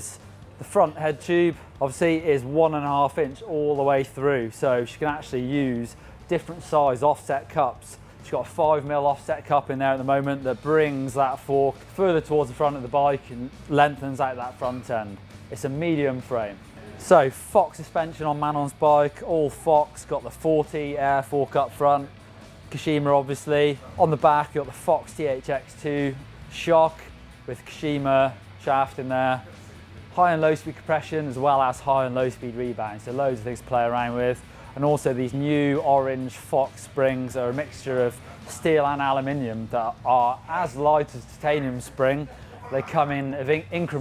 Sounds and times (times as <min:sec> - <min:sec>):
Speech: 0:00.0 - 0:22.1, 0:22.7 - 0:29.5, 0:30.1 - 0:44.0
Music: 0:00.0 - 0:44.0.